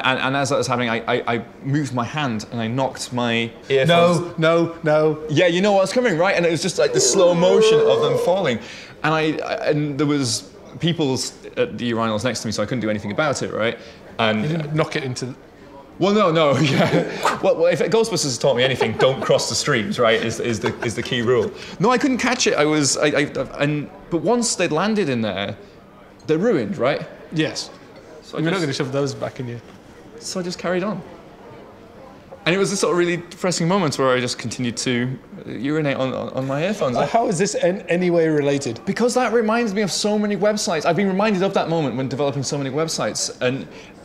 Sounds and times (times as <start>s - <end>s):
Speech: 0.0s - 25.6s, 32.4s - 44.0s.